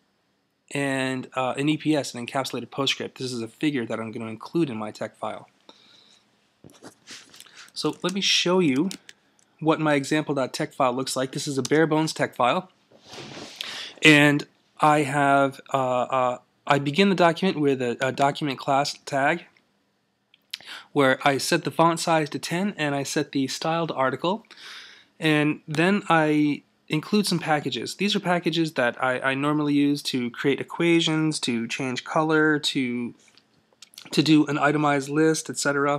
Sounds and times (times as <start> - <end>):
Speech: 0.7 - 5.5, 7.7 - 9.0, 9.6 - 12.8, 13.6 - 19.6, 20.6 - 24.5, 25.2 - 33.2, 33.8 - 35.9.